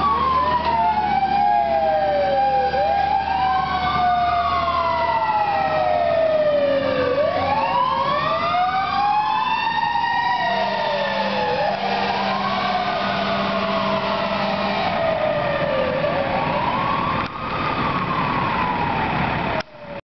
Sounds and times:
Heavy engine (low frequency): 0.0 - 20.0
Vehicle: 0.0 - 20.0.

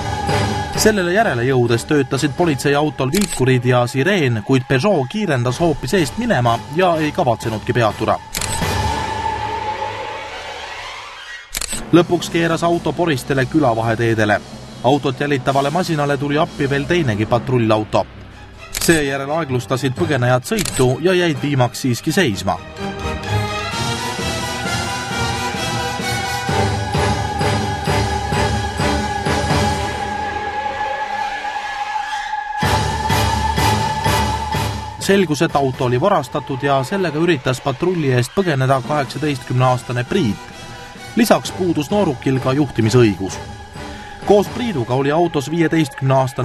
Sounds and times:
Music: 0.0 - 46.4
Speech: 0.8 - 8.2, 11.8 - 18.1, 18.8 - 22.6, 35.0 - 40.4, 41.2 - 43.4, 44.3 - 46.4.

